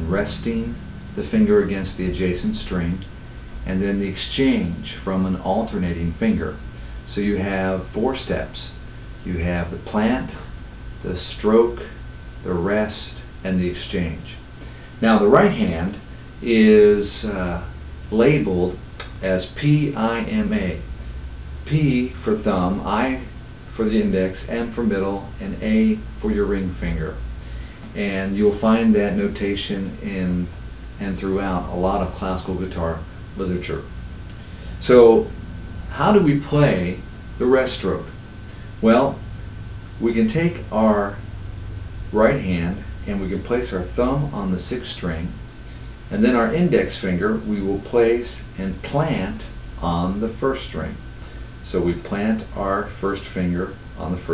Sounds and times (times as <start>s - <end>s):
Speech: 0.0s - 14.4s, 15.0s - 20.9s, 21.6s - 27.2s, 27.9s - 33.9s, 34.8s - 38.2s, 38.8s - 39.2s, 40.0s - 41.2s, 42.1s - 45.4s, 46.1s - 51.0s, 51.6s - 54.3s.